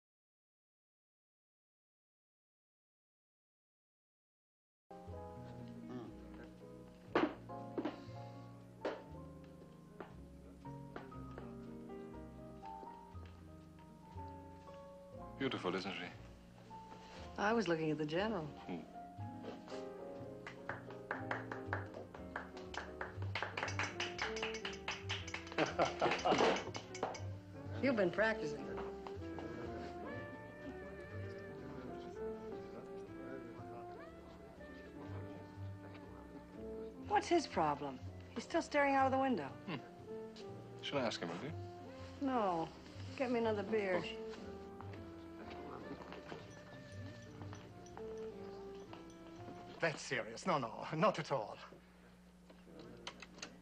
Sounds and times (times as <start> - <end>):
Music: 4.9 - 53.6.